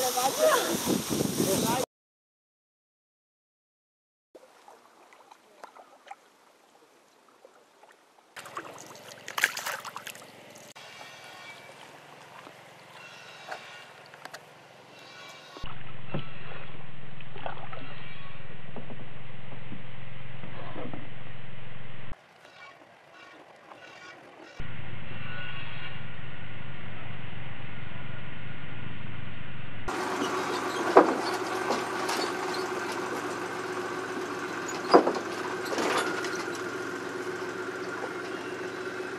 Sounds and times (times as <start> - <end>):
Rowboat, canoe, kayak: 4.4 - 14.9, 15.6 - 21.2, 22.2 - 24.6.